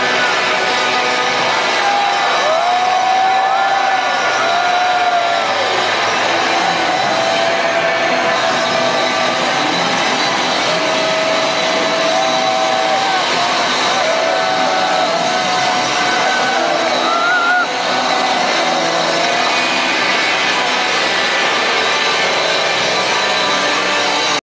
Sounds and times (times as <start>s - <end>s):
Music: 0.0s - 24.4s.